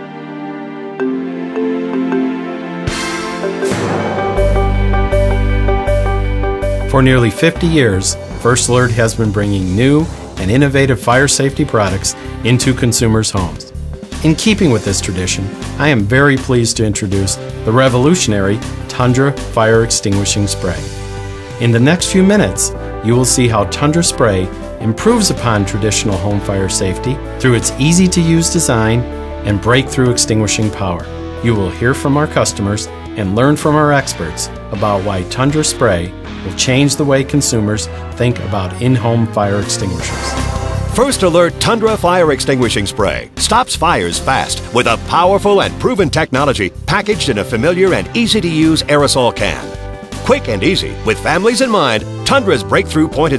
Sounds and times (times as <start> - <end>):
Music: 0.0 - 53.3
Speech: 6.9 - 20.9, 21.6 - 40.3, 41.0 - 53.3.